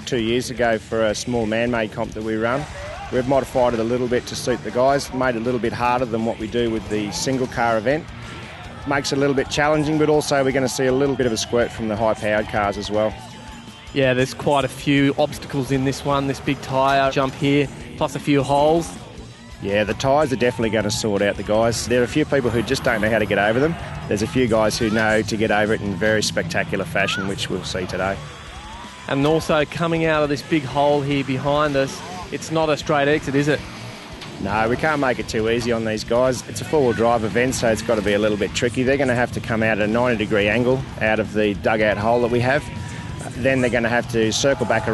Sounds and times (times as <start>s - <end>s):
Speech: 0.0s - 8.1s, 8.8s - 13.2s, 13.9s - 19.0s, 19.6s - 28.2s, 29.1s - 33.6s, 34.4s - 44.9s
Music: 0.0s - 44.9s.